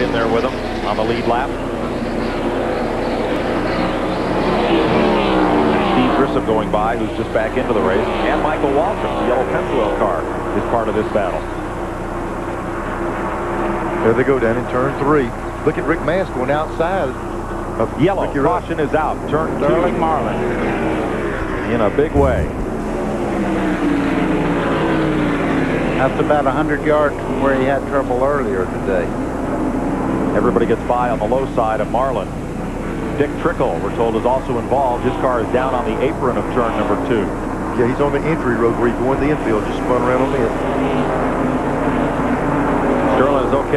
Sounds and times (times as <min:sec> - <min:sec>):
Speech: 0:00.0 - 0:01.7, 0:05.8 - 0:11.6, 0:14.0 - 0:17.2, 0:17.8 - 0:20.6, 0:21.6 - 0:22.6, 0:26.0 - 0:29.2, 0:30.4 - 0:32.3, 0:33.2 - 0:40.7, 0:43.1 - 0:43.7.